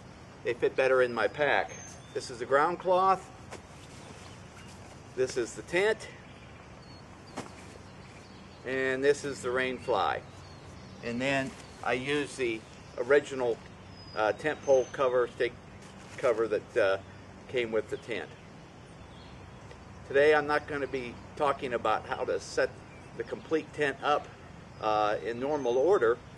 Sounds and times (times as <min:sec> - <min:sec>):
Speech: 0:00.5 - 0:03.3, 0:05.2 - 0:06.2, 0:08.7 - 0:10.2, 0:11.0 - 0:13.6, 0:14.2 - 0:15.6, 0:16.2 - 0:18.4, 0:20.1 - 0:26.2.